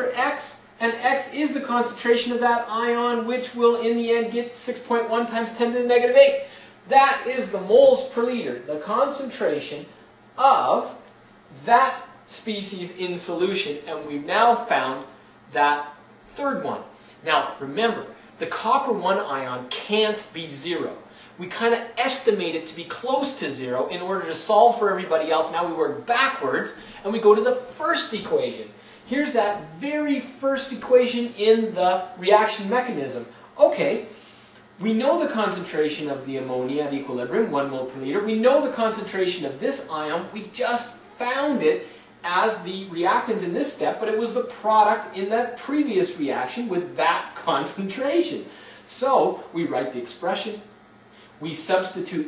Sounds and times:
Speech: 0.0s - 34.1s, 34.8s - 50.8s, 51.4s - 52.2s.

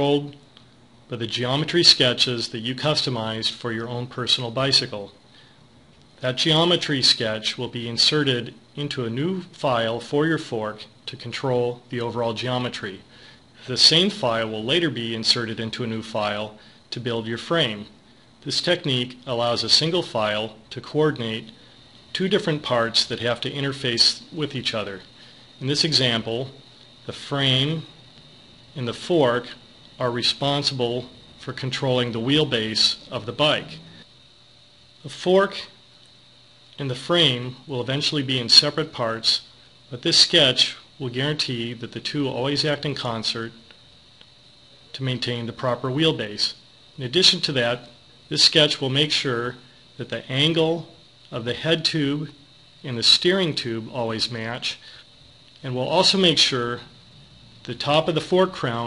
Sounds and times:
Speech: 0.0s - 0.4s, 1.1s - 5.2s, 6.2s - 28.0s, 28.8s - 34.0s, 35.0s - 35.8s, 36.8s - 43.7s, 44.9s - 55.0s, 55.6s - 56.9s, 57.6s - 58.8s.

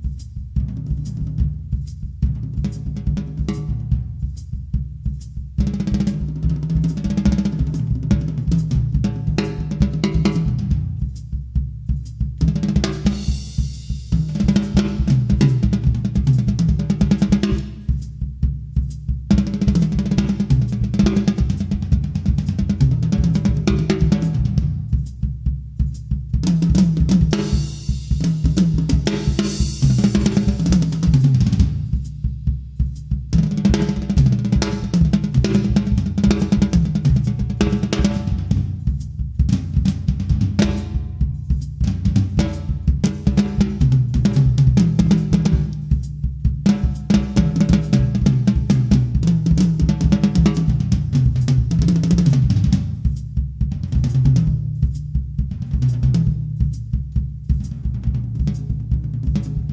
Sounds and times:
Bass drum: 0.0s - 59.7s.

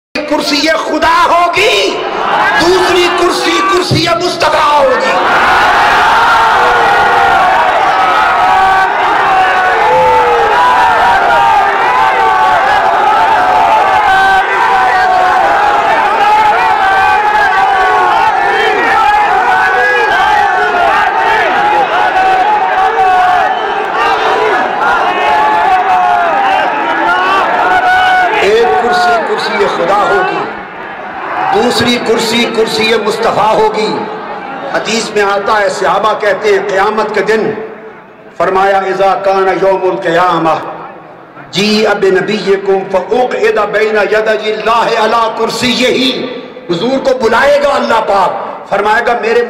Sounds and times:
Male speech, man speaking: 0.2s - 2.0s, 2.6s - 5.2s, 28.4s - 30.5s, 31.5s - 34.1s, 34.7s - 37.6s, 38.4s - 40.7s, 41.4s - 49.5s
Narration, monologue: 0.2s - 5.2s, 31.6s - 40.8s, 41.4s - 49.5s.

